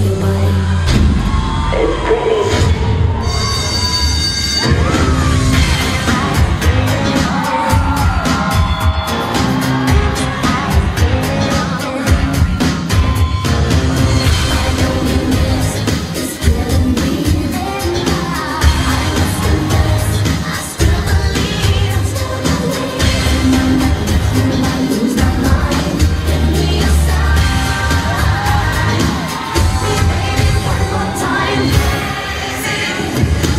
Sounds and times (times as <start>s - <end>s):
Music: 0.0s - 33.5s.